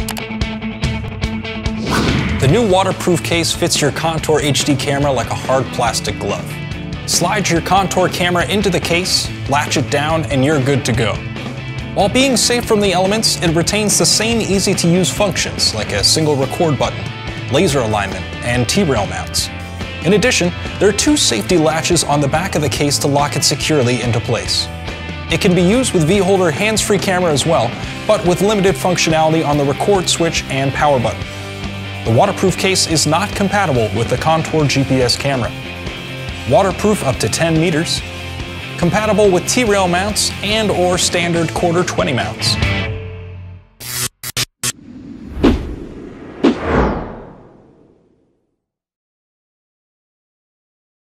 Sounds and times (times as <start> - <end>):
Music: 0.0 - 44.1
Speech: 2.4 - 11.2, 12.0 - 24.7, 25.3 - 31.2, 32.1 - 35.6, 36.5 - 38.0, 38.8 - 42.6.